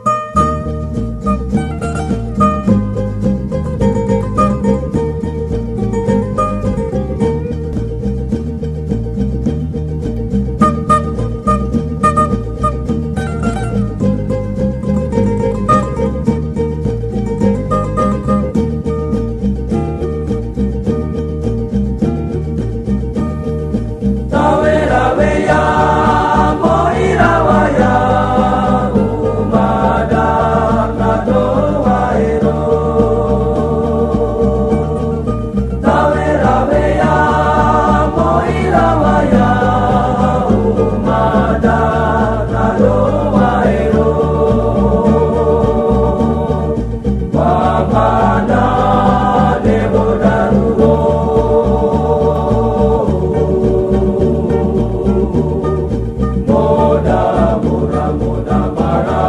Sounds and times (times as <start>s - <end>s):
Happy music: 0.0s - 59.2s.